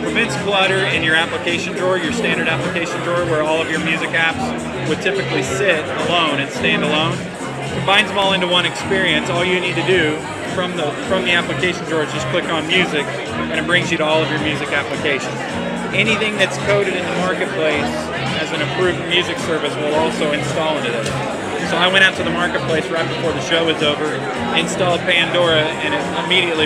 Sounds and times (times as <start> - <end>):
Music: 0.0 - 26.6
Speech: 0.0 - 26.6.